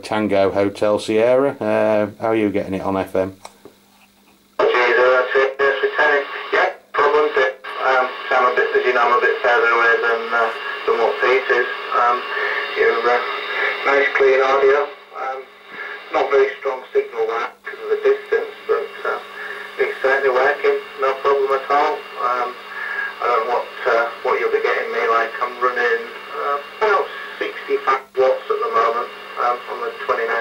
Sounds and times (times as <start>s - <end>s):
Speech: 0.0s - 3.4s, 4.6s - 30.4s
Radio: 4.6s - 30.4s.